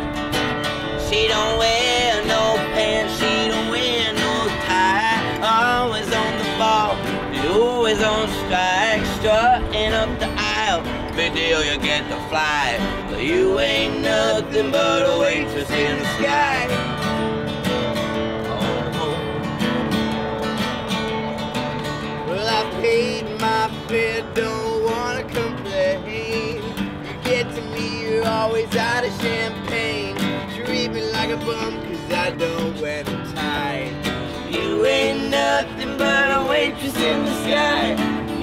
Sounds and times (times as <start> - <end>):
Music: 0.0 - 38.4.